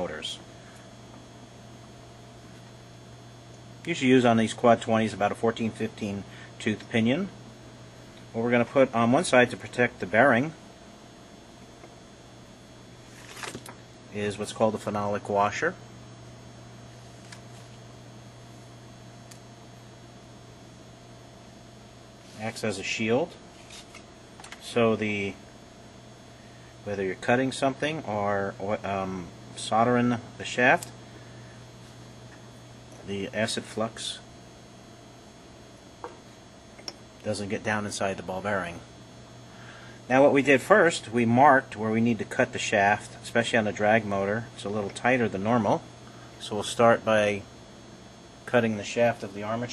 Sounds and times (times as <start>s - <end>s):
Speech: 0.0s - 0.5s, 3.8s - 7.4s, 8.3s - 10.6s, 14.1s - 15.8s, 22.4s - 23.4s, 24.6s - 25.4s, 26.8s - 30.9s, 33.0s - 34.3s, 37.2s - 38.9s, 40.1s - 47.5s, 48.4s - 49.7s.